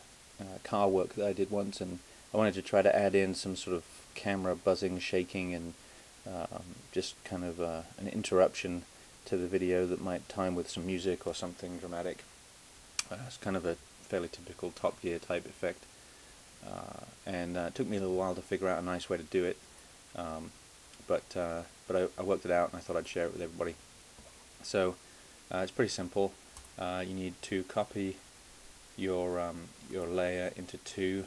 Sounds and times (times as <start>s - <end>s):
Speech: 0.4s - 12.3s, 13.0s - 15.9s, 16.6s - 19.6s, 20.2s - 23.8s, 24.6s - 28.2s, 29.0s - 31.2s.